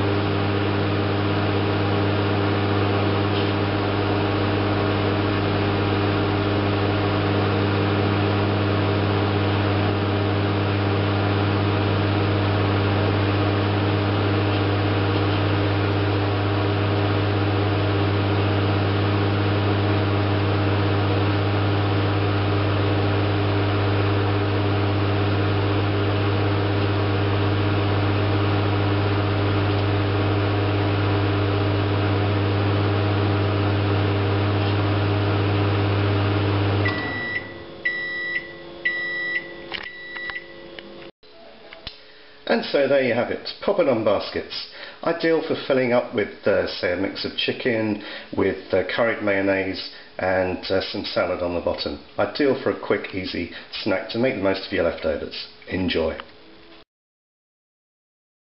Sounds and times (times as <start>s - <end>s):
Microwave oven: 0.0s - 41.1s
Speech: 42.5s - 56.3s.